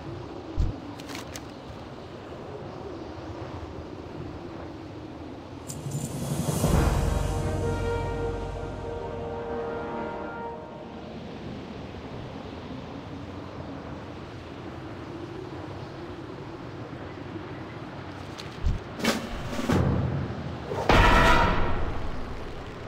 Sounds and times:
Music: 0:05.7 - 0:11.4.

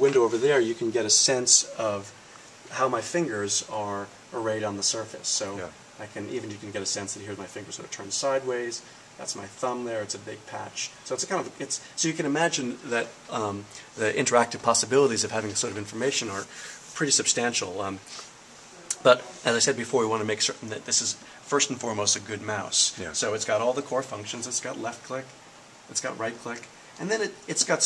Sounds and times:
Speech: 0:00.0 - 0:27.8.

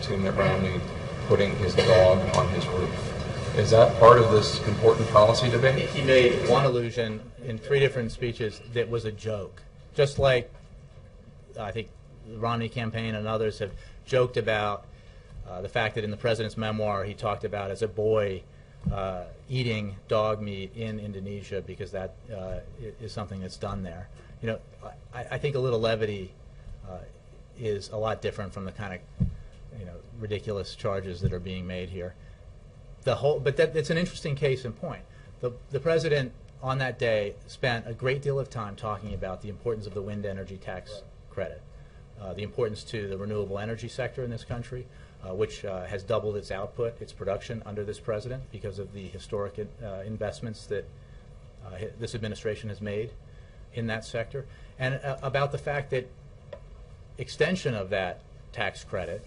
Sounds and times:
Speech: 0:00.0 - 0:10.6, 0:11.5 - 0:14.9, 0:15.5 - 0:29.1, 0:29.7 - 0:32.2, 0:33.0 - 0:50.9, 0:51.6 - 0:53.2, 0:53.8 - 0:56.1, 0:57.2 - 0:59.2.

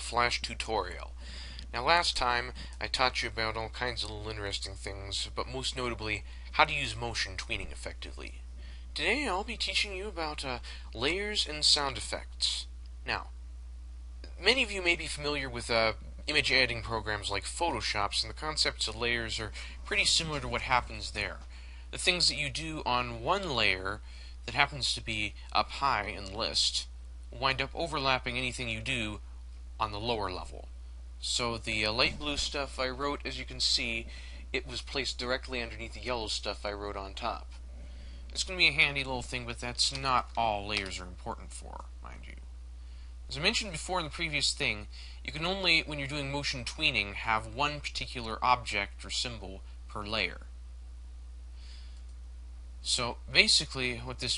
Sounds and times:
Speech: 0:00.0 - 0:08.4, 0:09.0 - 0:13.4, 0:14.3 - 0:29.2, 0:29.8 - 0:37.6, 0:38.3 - 0:42.4, 0:43.3 - 0:50.5, 0:52.8 - 0:54.3.

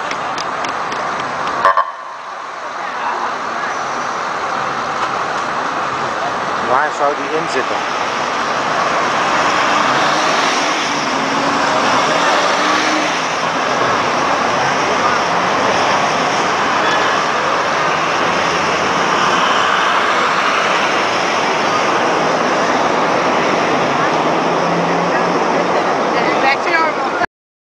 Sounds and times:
Car: 0:00.0 - 0:27.3
Outside, urban or manmade: 0:00.0 - 0:27.3
Truck: 0:00.0 - 0:27.3.

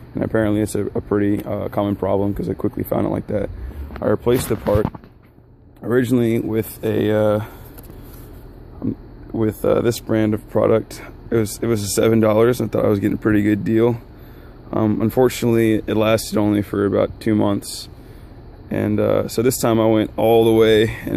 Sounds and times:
Speech: 0:00.2 - 0:04.9, 0:05.8 - 0:07.6, 0:08.8 - 0:14.1, 0:14.7 - 0:17.9, 0:18.7 - 0:21.1.

